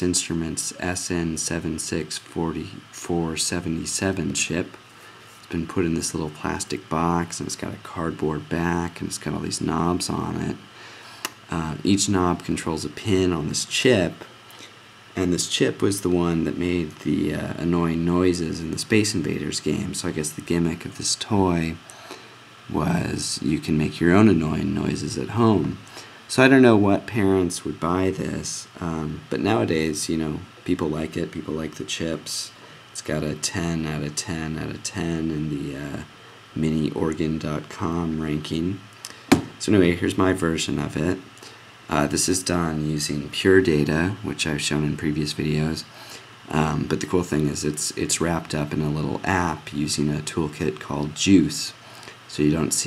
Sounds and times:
Speech: 0:00.0 - 0:10.7, 0:11.3 - 0:14.3, 0:15.2 - 0:21.9, 0:22.7 - 0:38.9, 0:39.6 - 0:52.8.

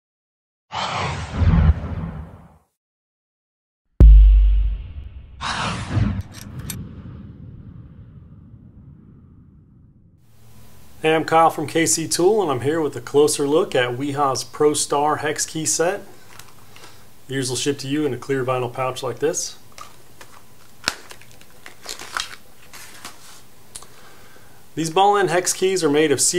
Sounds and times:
Whoosh, swoosh, swish: 0:00.7 - 0:02.6, 0:05.2 - 0:09.6.

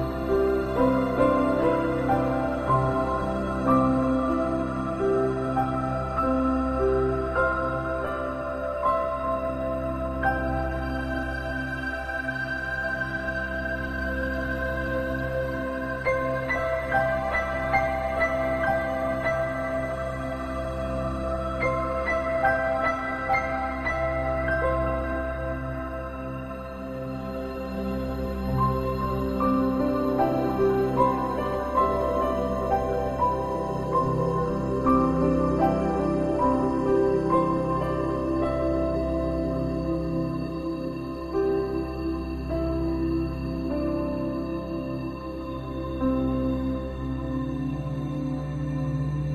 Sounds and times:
New-age music: 0:00.0 - 0:49.3.

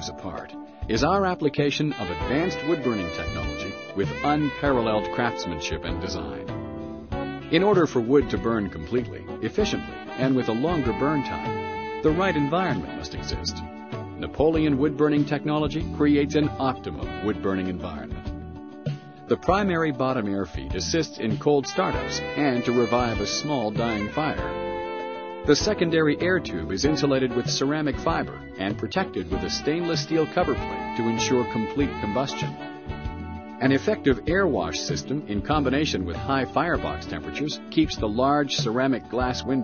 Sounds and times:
Speech: 0:00.0 - 0:06.5, 0:07.5 - 0:18.2, 0:19.3 - 0:24.5, 0:25.5 - 0:32.6, 0:33.6 - 0:39.6
Music: 0:00.0 - 0:39.6.

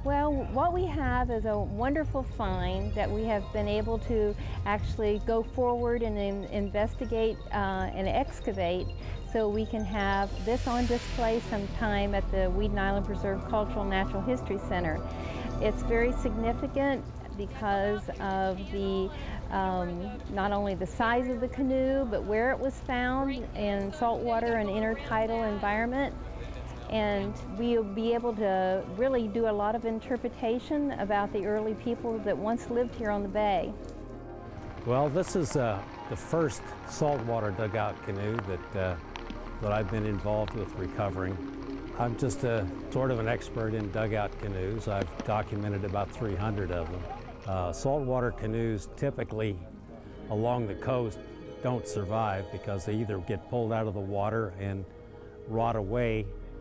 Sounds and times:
Boat, Water vehicle: 0:00.0 - 0:33.8, 0:34.6 - 0:49.2.

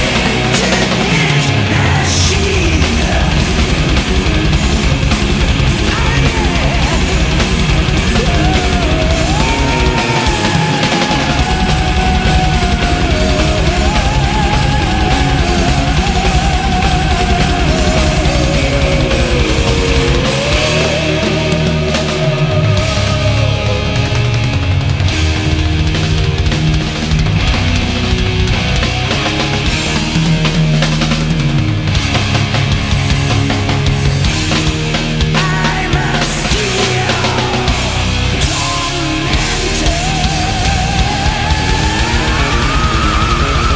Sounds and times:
Punk rock: 0:00.0 - 0:43.7.

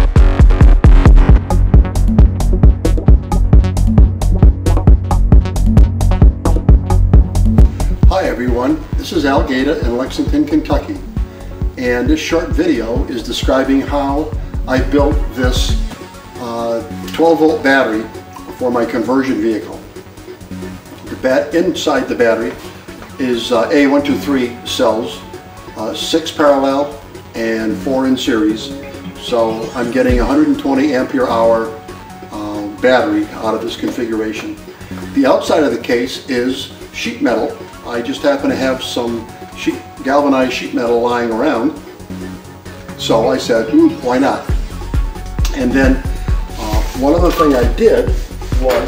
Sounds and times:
Music: 0:00.0 - 0:48.8
Speech: 0:08.1 - 0:11.0, 0:11.8 - 0:15.8, 0:16.4 - 0:19.8, 0:21.1 - 0:22.6, 0:23.2 - 0:25.2, 0:25.8 - 0:34.6, 0:35.2 - 0:41.8, 0:43.0 - 0:44.5, 0:45.5 - 0:46.0, 0:46.6 - 0:48.8.

